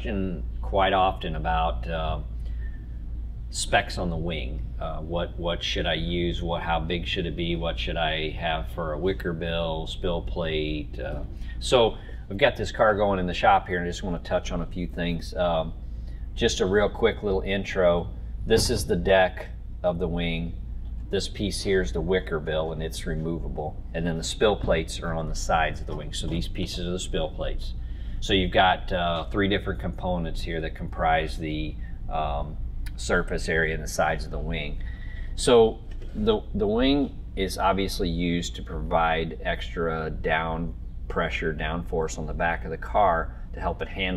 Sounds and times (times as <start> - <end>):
Speech: 0.0 - 2.3, 3.5 - 15.8, 16.4 - 34.8, 35.4 - 44.1.